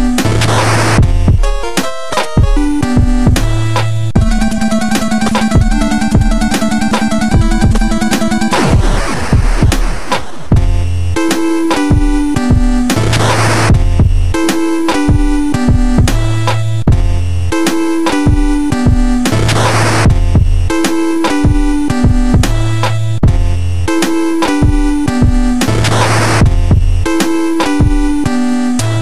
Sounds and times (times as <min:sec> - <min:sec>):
Music: 0:00.0 - 0:29.0.